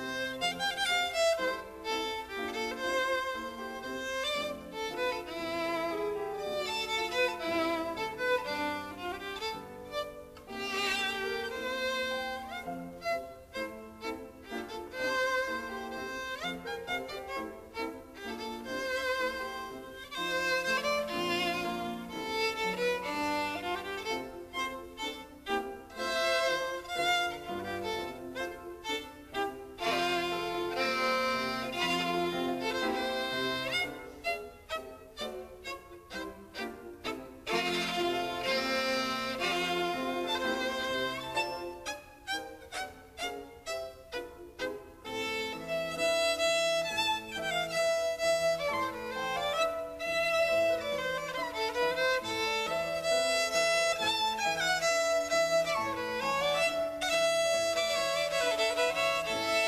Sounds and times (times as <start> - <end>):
Violin, fiddle: 0.0 - 59.6.